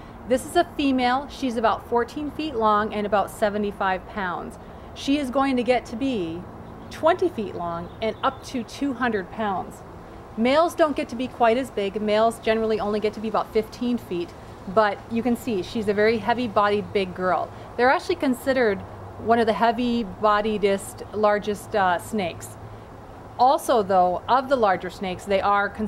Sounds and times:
Outside, rural or natural: 0.0 - 25.8
Speech: 0.3 - 9.8, 10.4 - 22.6, 23.4 - 25.8.

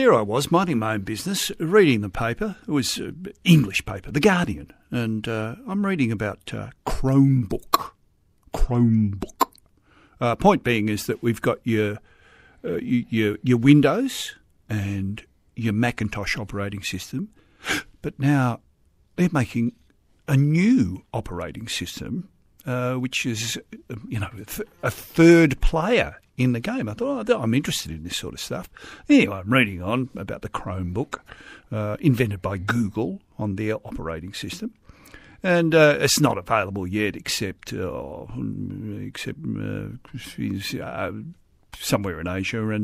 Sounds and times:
Speech: 0.0 - 9.4, 10.2 - 12.0, 12.6 - 17.3, 18.0 - 18.6, 19.2 - 34.8, 35.4 - 42.8.

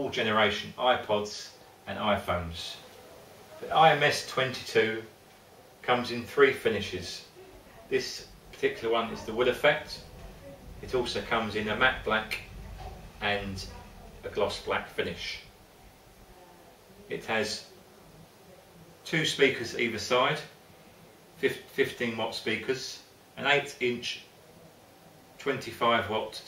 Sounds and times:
Speech: 0.0 - 5.1, 5.8 - 15.5, 16.3 - 17.9, 18.5 - 20.6, 21.4 - 24.3, 25.4 - 26.4.

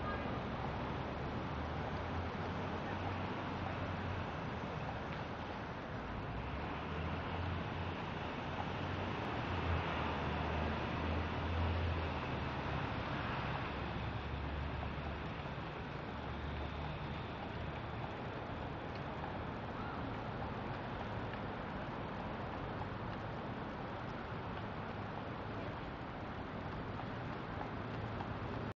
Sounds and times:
Clip-clop: 0.0 - 28.7.

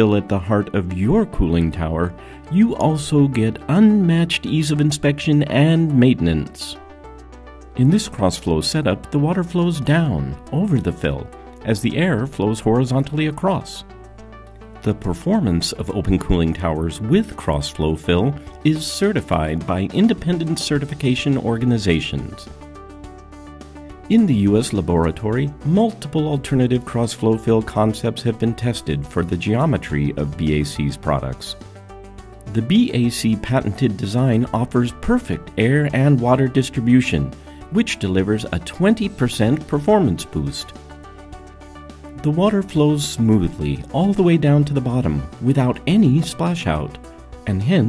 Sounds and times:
Speech: 0.0 - 6.8, 7.8 - 13.9, 14.8 - 22.5, 24.1 - 31.6, 32.5 - 40.8, 42.2 - 47.8
Music: 0.0 - 47.8.

